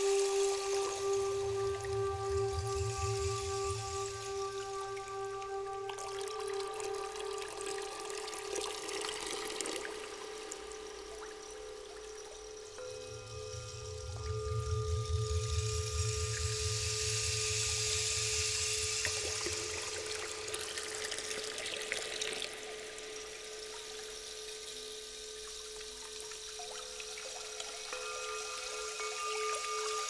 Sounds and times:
Water: 0.0s - 30.1s
Water tap, faucet: 6.0s - 12.6s, 16.0s - 30.1s
Sink (filling or washing): 17.8s - 30.1s.

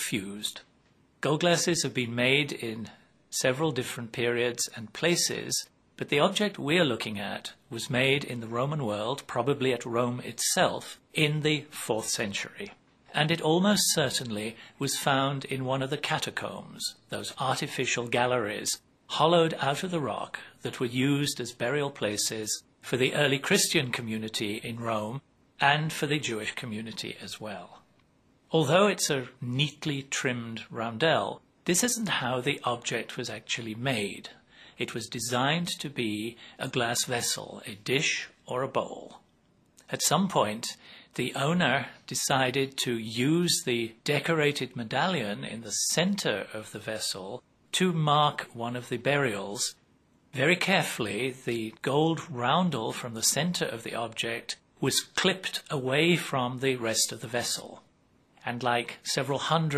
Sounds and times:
Speech: 0.0s - 27.9s, 28.5s - 59.7s.

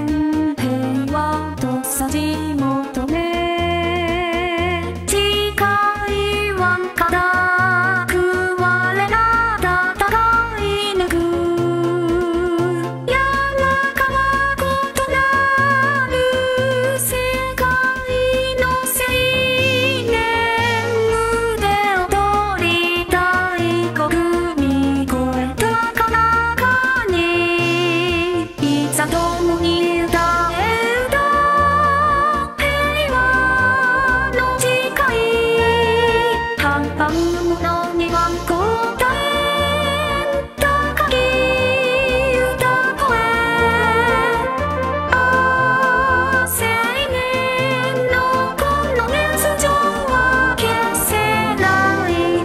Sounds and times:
Music: 0.0s - 52.4s.

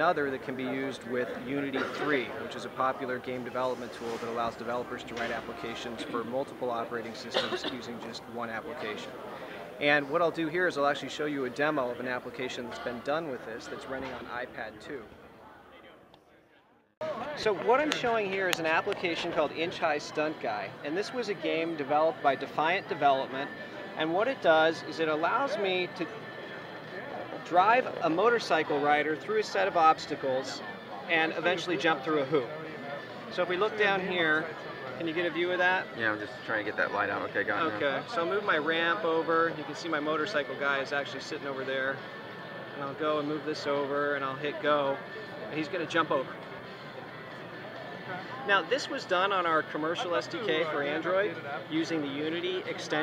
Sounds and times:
Speech: 0.0s - 9.2s, 9.8s - 15.1s, 17.0s - 26.1s, 27.2s - 32.6s, 33.3s - 42.0s, 42.7s - 46.3s, 48.3s - 53.0s.

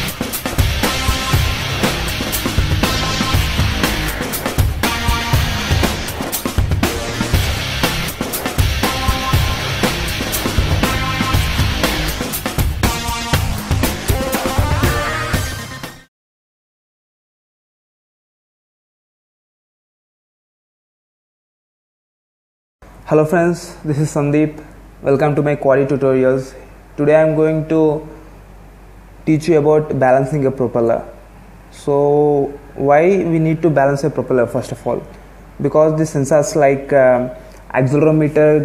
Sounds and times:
Music: 0.0s - 16.1s.

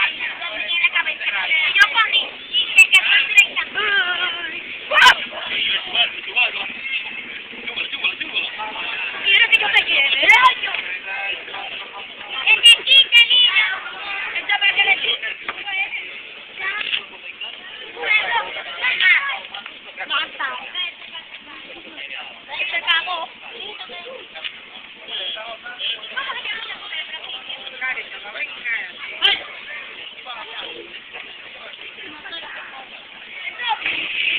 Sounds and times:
Outside, urban or manmade: 0.0s - 34.3s.

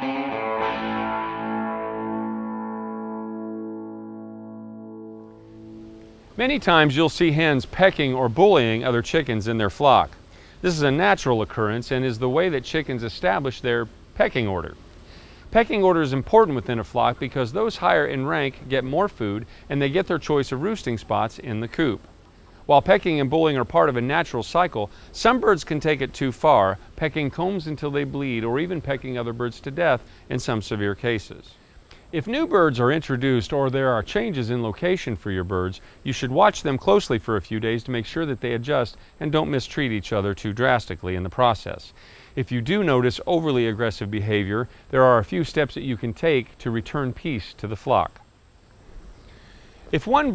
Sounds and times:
Speech: 6.4s - 14.8s, 15.5s - 22.1s, 22.7s - 48.2s, 49.9s - 50.3s.

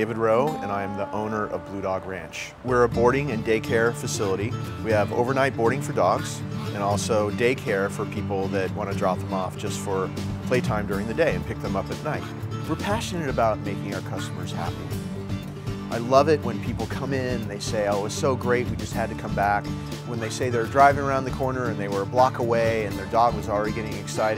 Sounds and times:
Speech: 0.0s - 15.0s, 15.9s - 24.3s
Music: 0.0s - 24.3s.

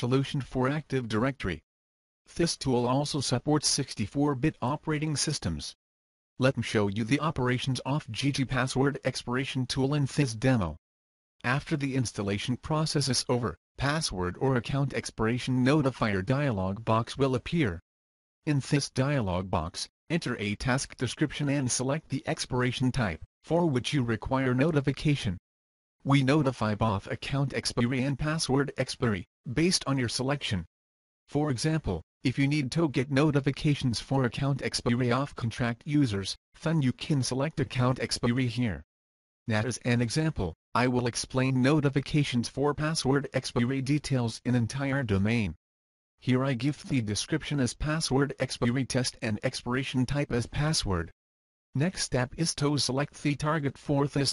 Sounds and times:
Speech: 0.0s - 1.6s, 2.3s - 5.8s, 6.4s - 10.8s, 11.4s - 17.8s, 18.5s - 25.4s, 26.1s - 30.7s, 31.3s - 38.9s, 39.5s - 45.6s, 46.2s - 51.2s, 51.8s - 54.3s.

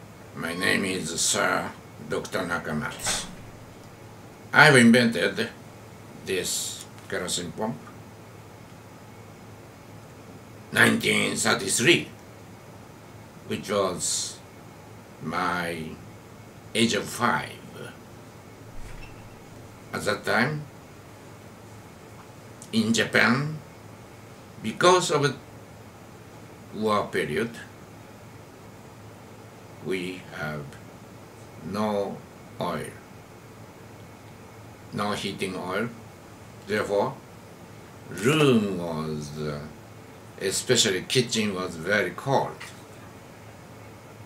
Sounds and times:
Speech: 0.4s - 3.4s, 4.6s - 5.6s, 6.2s - 7.9s, 10.7s - 12.2s, 13.5s - 14.5s, 15.2s - 16.0s, 16.7s - 18.0s, 19.9s - 20.7s, 22.6s - 23.6s, 24.6s - 25.4s, 26.7s - 27.7s, 29.8s - 30.8s, 31.6s - 33.1s, 34.9s - 36.0s, 36.7s - 37.2s, 38.1s - 39.8s, 40.4s - 42.9s.

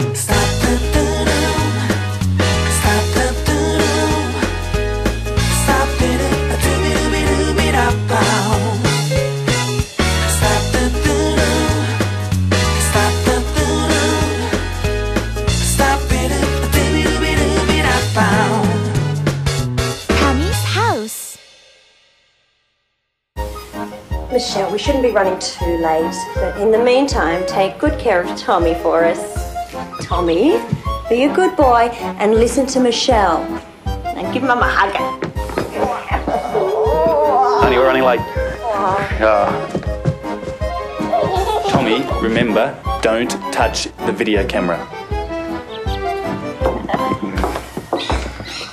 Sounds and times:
Music: 0.0s - 48.7s.

